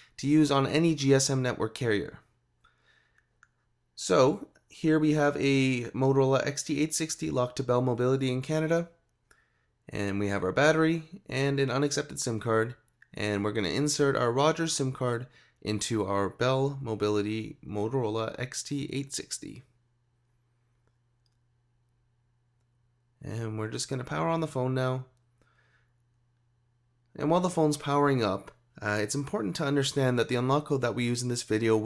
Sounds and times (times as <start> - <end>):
Speech: 0.2 - 2.3, 4.0 - 9.0, 9.9 - 19.8, 23.2 - 25.2, 27.2 - 31.8.